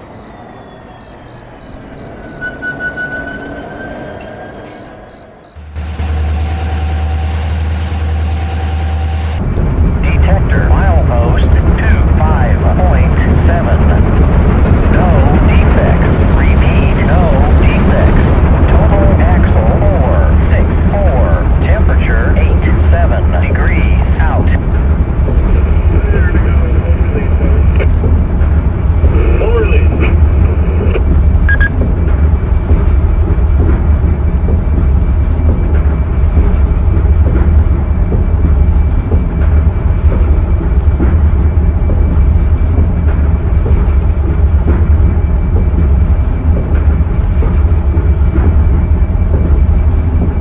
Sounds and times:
Speech: 0:10.0 - 0:14.0, 0:14.9 - 0:24.6, 0:25.9 - 0:27.9, 0:29.2 - 0:30.1.

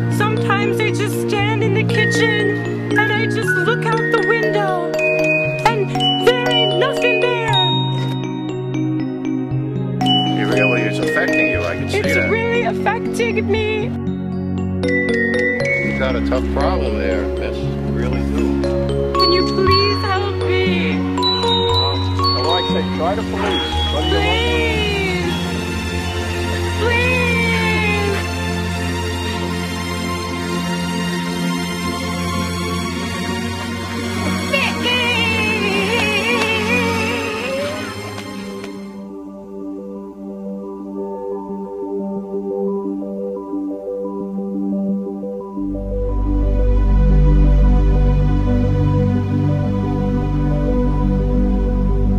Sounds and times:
Music: 0:00.0 - 0:52.1
Speech: 0:10.4 - 0:13.9, 0:15.9 - 0:18.5, 0:19.3 - 0:21.0, 0:21.8 - 0:25.4, 0:26.8 - 0:28.2, 0:34.5 - 0:38.1.

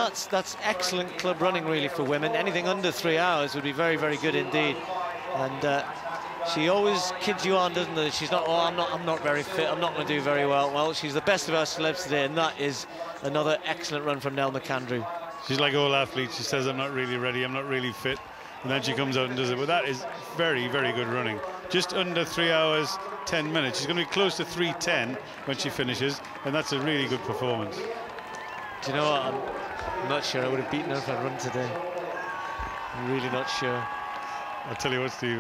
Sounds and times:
Speech: 0:00.0 - 0:28.0, 0:28.8 - 0:32.0, 0:33.0 - 0:33.9, 0:34.7 - 0:35.4
Outside, urban or manmade: 0:00.0 - 0:35.4.

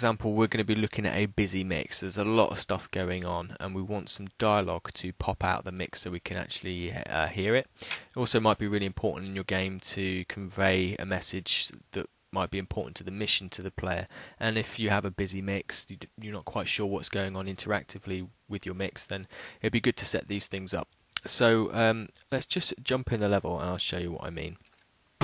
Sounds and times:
Speech: 0:00.0 - 0:24.6.

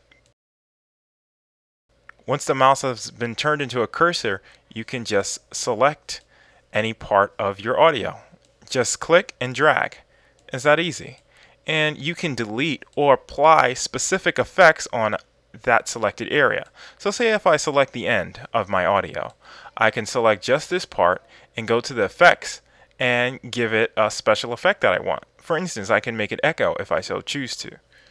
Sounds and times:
Speech: 0:02.2 - 0:27.8.

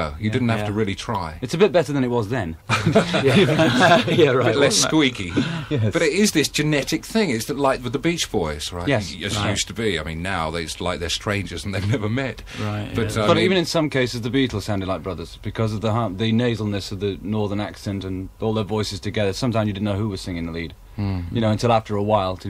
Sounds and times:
Speech: 0:00.0 - 0:22.4.

